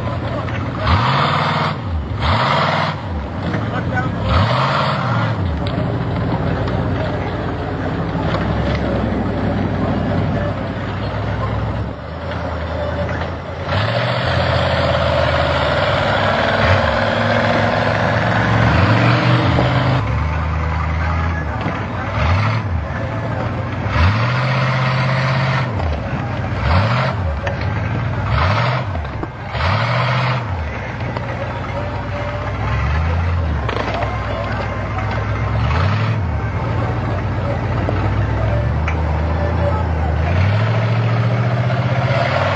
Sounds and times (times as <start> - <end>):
Truck: 0.0 - 42.5.